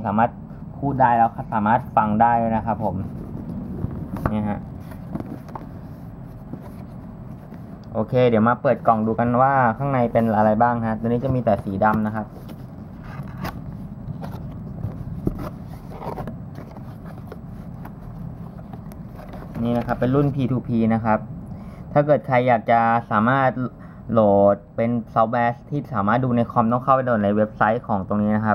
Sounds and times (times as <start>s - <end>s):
Speech: 0.0s - 3.1s, 4.2s - 4.7s, 7.9s - 12.3s, 19.6s - 21.3s, 22.0s - 28.5s.